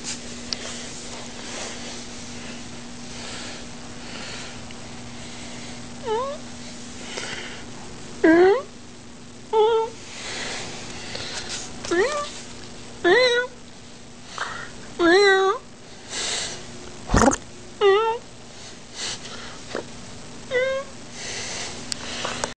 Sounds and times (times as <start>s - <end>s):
Meow: 9.6s - 10.0s, 11.9s - 12.3s, 13.0s - 13.6s, 15.0s - 15.6s, 17.8s - 18.2s, 20.5s - 20.9s.